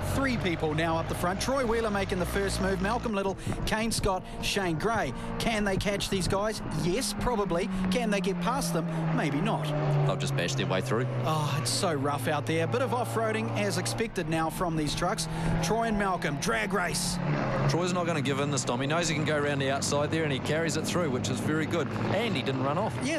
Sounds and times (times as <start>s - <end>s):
Truck: 0.0s - 23.1s
Speech: 0.1s - 23.1s.